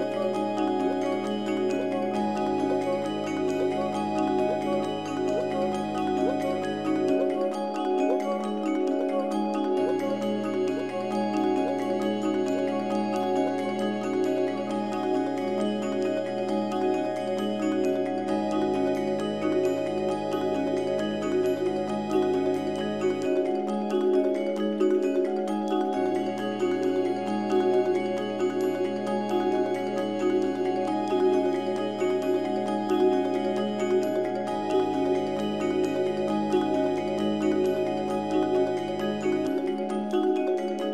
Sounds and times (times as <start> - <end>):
Vibraphone: 0.0 - 40.9.